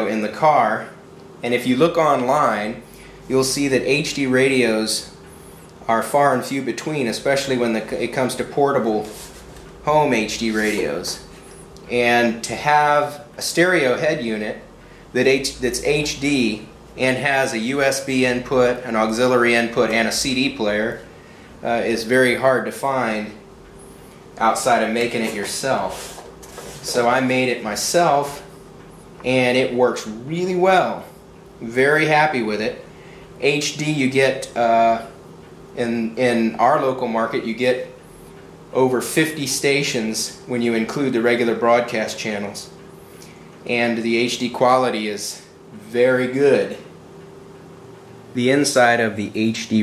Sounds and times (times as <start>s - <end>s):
Speech: 0.0s - 5.2s, 5.8s - 9.2s, 9.8s - 11.3s, 11.9s - 23.4s, 24.4s - 26.1s, 26.8s - 28.5s, 29.2s - 32.8s, 33.4s - 35.2s, 35.8s - 38.0s, 38.7s - 42.8s, 43.6s - 46.9s, 48.3s - 49.8s.